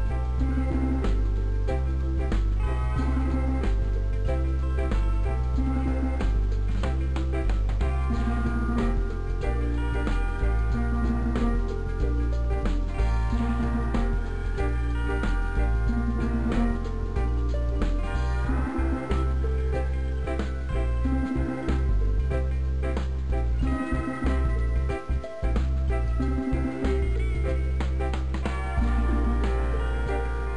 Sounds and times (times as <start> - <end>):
Music: 0.0 - 30.5.